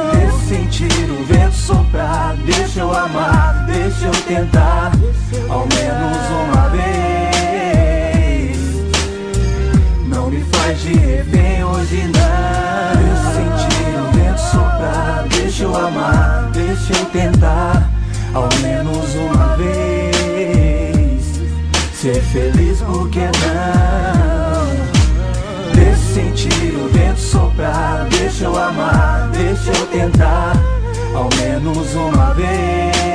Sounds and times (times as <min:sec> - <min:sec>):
Rhythm and blues: 0:00.0 - 0:33.1.